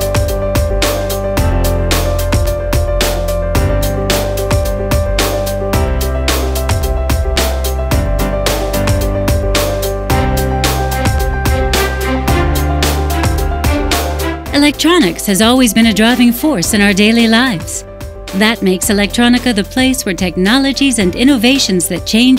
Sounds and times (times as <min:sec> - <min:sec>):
Music: 0:00.0 - 0:22.3.